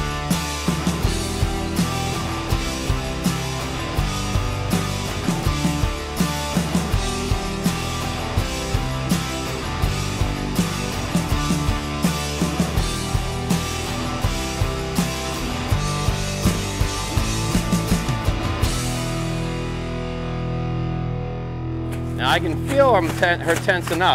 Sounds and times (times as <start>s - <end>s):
Music: 0.0s - 24.1s.